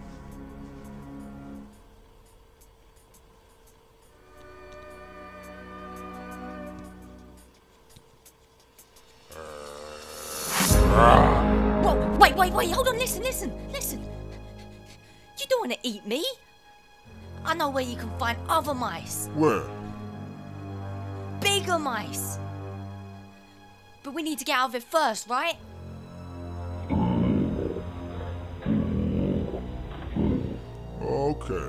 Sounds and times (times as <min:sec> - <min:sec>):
Music: 0:00.0 - 0:31.6
Speech: 0:10.9 - 0:14.0, 0:21.4 - 0:22.4, 0:24.1 - 0:25.6, 0:31.0 - 0:31.6.